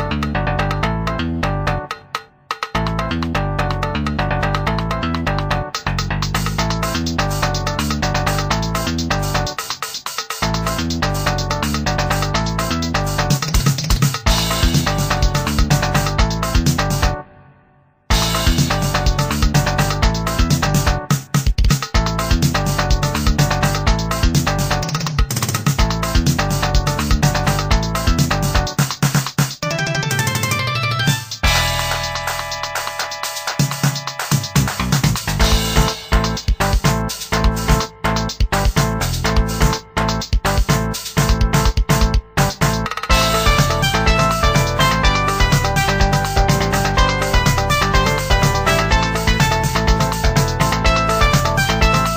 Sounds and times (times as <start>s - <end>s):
Music: 0.0s - 52.1s
Sound effect: 29.6s - 36.3s.